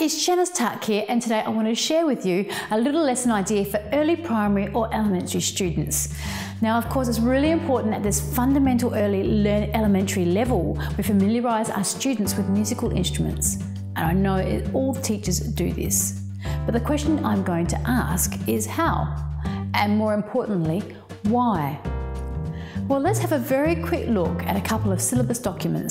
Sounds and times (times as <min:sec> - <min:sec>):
Speech: 0:00.0 - 0:21.9, 0:22.9 - 0:25.9
Tender music: 0:03.4 - 0:25.9.